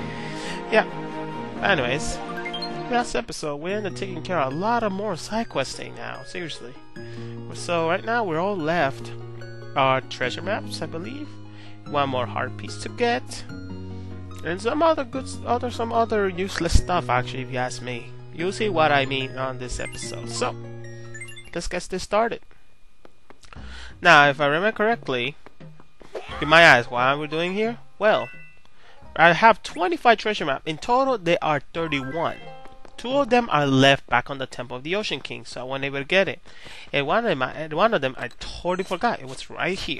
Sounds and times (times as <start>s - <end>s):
Speech: 1.6s - 2.2s, 2.9s - 6.8s, 7.5s - 9.2s, 9.8s - 11.3s, 11.9s - 13.5s, 14.4s - 20.6s, 21.5s - 22.4s, 24.0s - 25.4s, 26.4s - 28.3s, 29.2s - 32.4s, 33.0s - 39.9s.